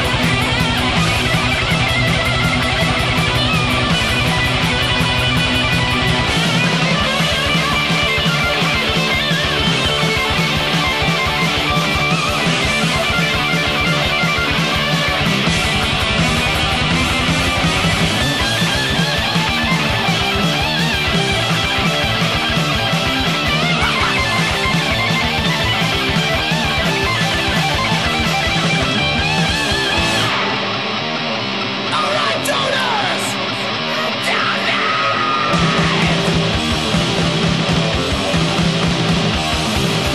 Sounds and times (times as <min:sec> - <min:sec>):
Heavy metal: 0:00.0 - 0:40.1.